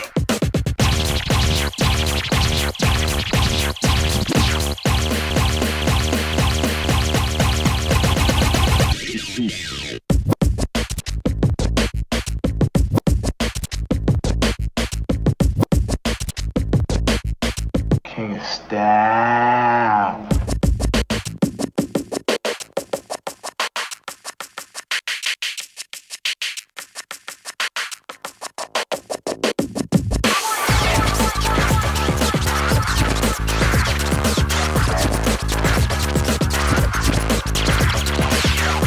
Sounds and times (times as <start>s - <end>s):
Scratching (performance technique): 0.0s - 38.8s.